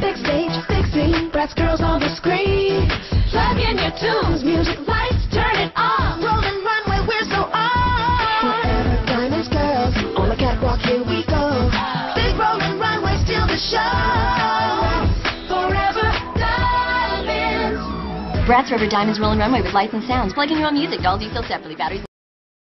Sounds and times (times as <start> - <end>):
Music: 0.0 - 22.1
Speech: 18.5 - 22.1.